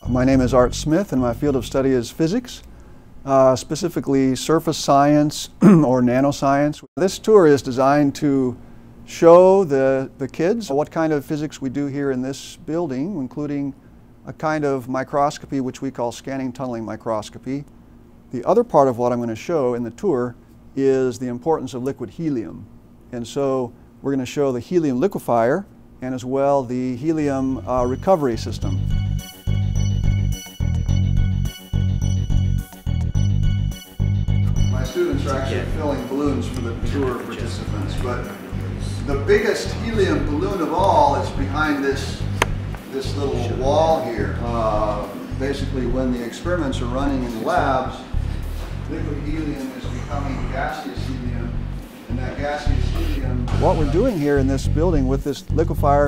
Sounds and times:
Music: 0.0 - 2.0, 27.2 - 56.0
Speech: 0.0 - 2.7, 3.3 - 17.7, 18.3 - 28.8, 34.8 - 42.3, 42.9 - 48.1, 48.9 - 56.0.

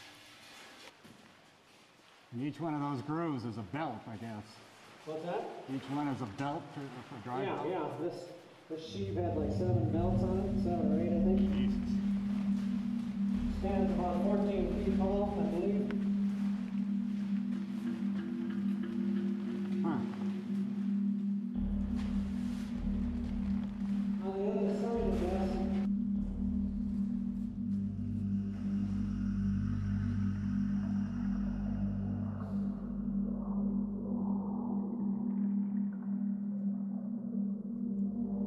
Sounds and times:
Speech: 2.3 - 12.0, 13.6 - 16.0, 24.2 - 25.9.

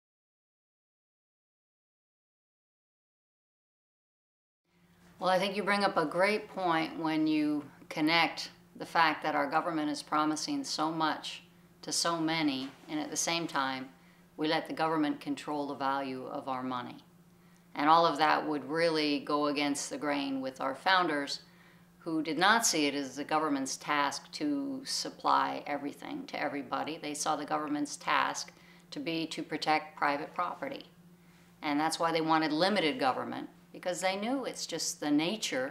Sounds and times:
Speech: 5.2 - 17.1, 17.8 - 21.4, 22.0 - 31.0, 31.6 - 35.7.

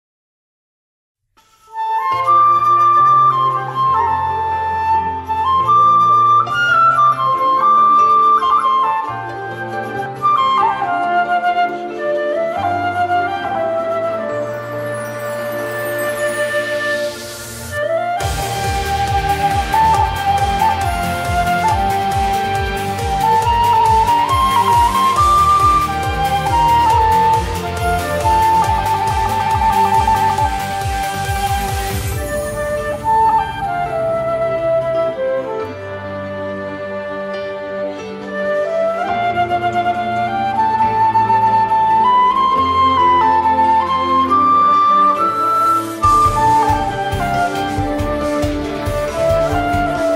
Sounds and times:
Classical music: 1.4 - 50.1
Flute: 1.4 - 50.1.

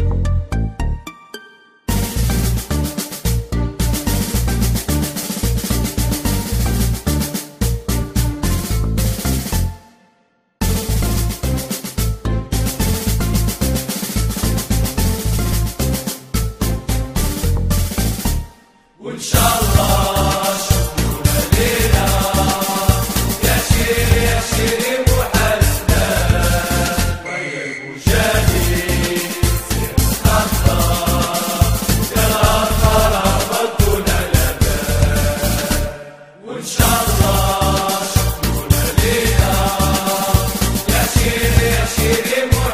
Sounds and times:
Music: 0.0 - 42.7.

